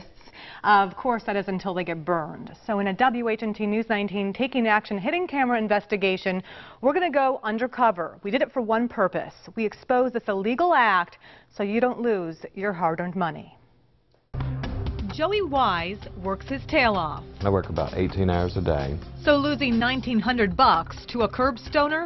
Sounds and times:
Music: 14.3s - 22.0s.

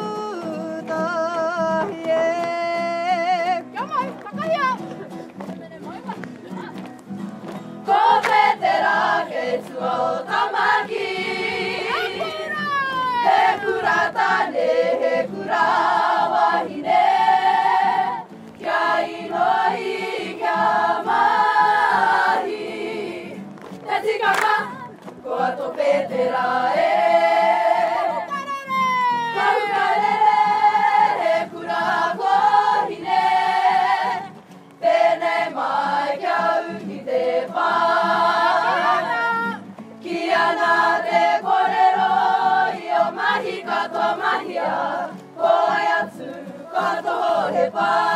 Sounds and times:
Music: 0.0s - 48.1s.

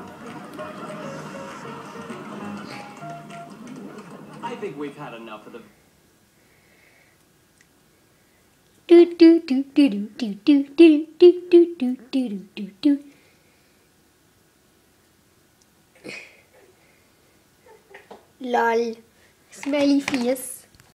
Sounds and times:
Speech: 4.4s - 5.8s, 18.4s - 20.7s.

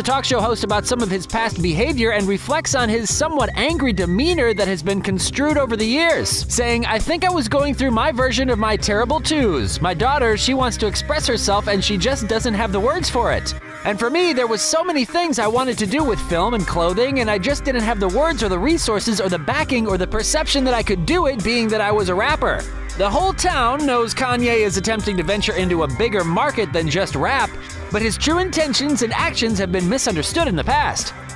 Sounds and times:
Speech: 0.0s - 31.1s
Music: 0.0s - 31.3s.

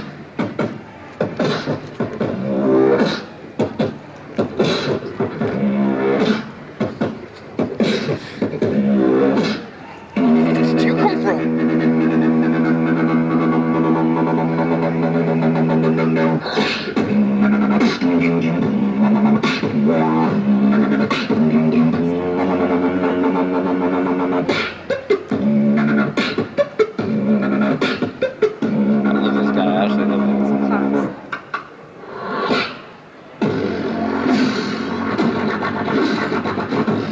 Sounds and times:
Speech: 10.2s - 11.5s, 29.3s - 31.2s.

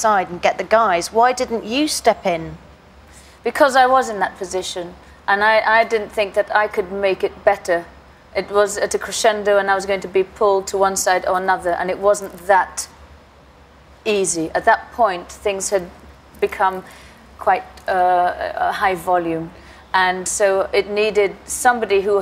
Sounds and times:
Female speech, woman speaking: 0.0s - 2.6s, 3.5s - 12.9s, 14.1s - 22.2s.

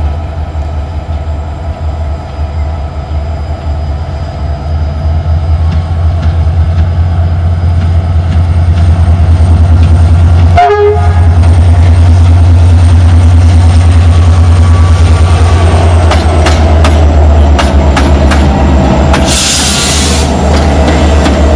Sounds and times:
Railroad car, train wagon: 0.0s - 21.5s
Train horn: 10.5s - 11.4s
Clickety-clack: 16.0s - 18.5s, 20.5s - 21.5s.

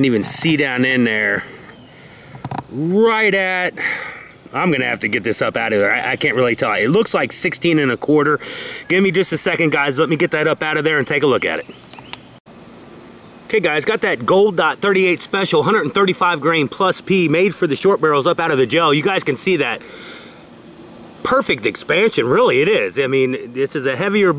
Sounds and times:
Speech: 0.0s - 1.6s, 2.7s - 11.7s, 13.5s - 19.8s, 21.2s - 24.3s
Outside, rural or natural: 0.0s - 24.3s.

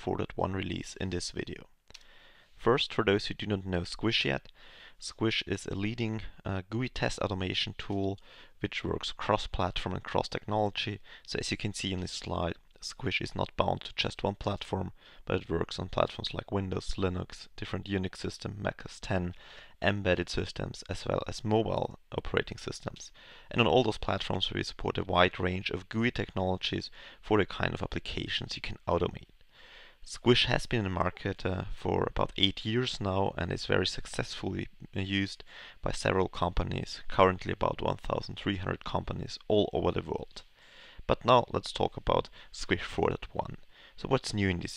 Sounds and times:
Speech: 0.0s - 1.8s, 2.6s - 29.3s, 30.0s - 40.5s, 41.1s - 44.7s.

